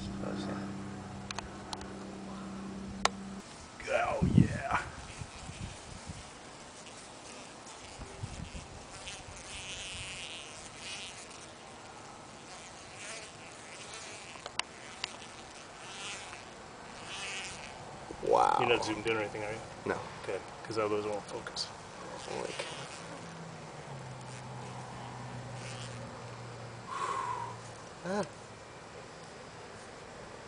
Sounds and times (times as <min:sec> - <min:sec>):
Bee, wasp, etc.: 0:00.0 - 0:30.4
Fly, housefly: 0:00.0 - 0:30.4.